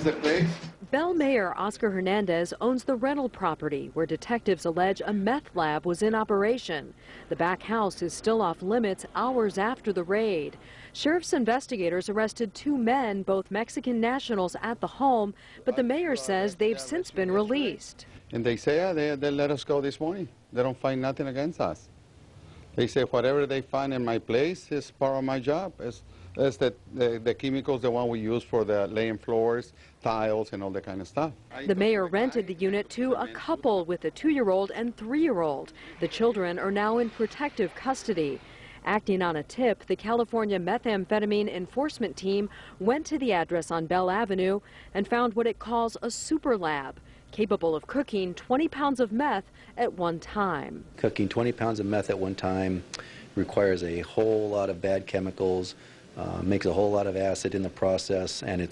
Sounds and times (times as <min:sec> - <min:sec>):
Speech: 0:00.0 - 0:10.5, 0:22.8 - 0:52.8, 0:53.4 - 0:58.7.